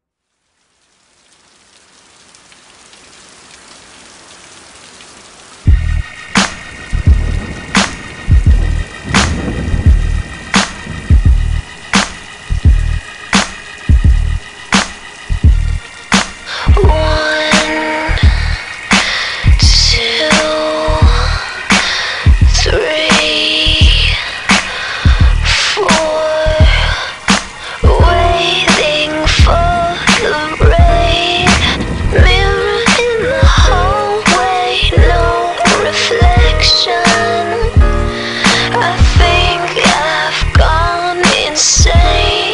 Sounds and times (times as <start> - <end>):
Rain on surface: 0.0 - 42.5
Music: 5.7 - 42.5.